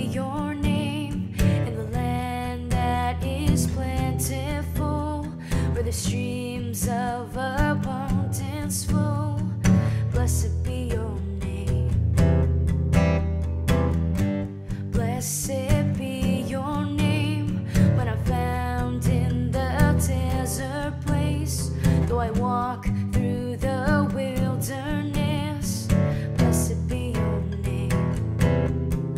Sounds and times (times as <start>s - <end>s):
Guitar: 0.0s - 29.1s.